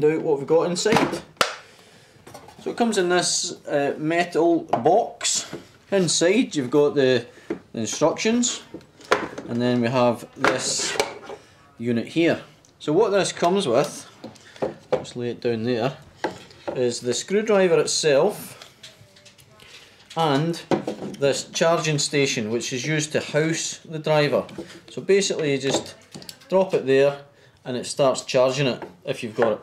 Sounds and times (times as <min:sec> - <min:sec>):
Speech: 0:00.0 - 0:01.2, 0:02.6 - 0:08.7, 0:09.5 - 0:11.0, 0:11.7 - 0:14.1, 0:19.2 - 0:29.6.